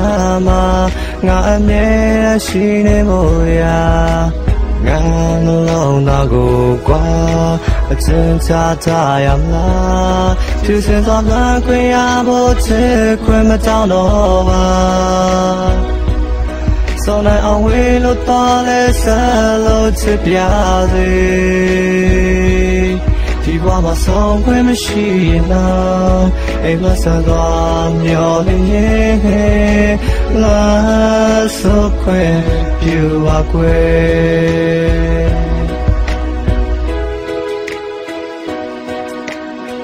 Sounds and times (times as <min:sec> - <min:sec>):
Music: 0:00.0 - 0:39.8.